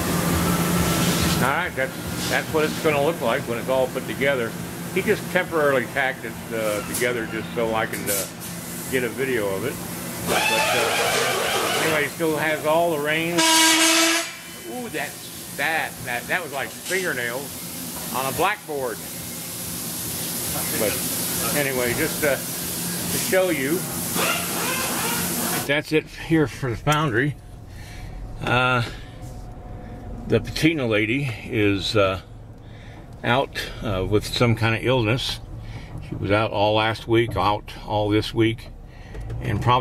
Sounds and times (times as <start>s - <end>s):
Speech: 1.4s - 8.3s, 8.9s - 9.8s, 10.5s - 13.4s, 14.7s - 17.5s, 18.1s - 19.0s, 20.5s - 22.4s, 23.1s - 23.8s, 25.7s - 27.4s, 30.3s - 32.3s, 33.2s - 35.4s, 36.1s - 38.7s, 39.4s - 39.8s.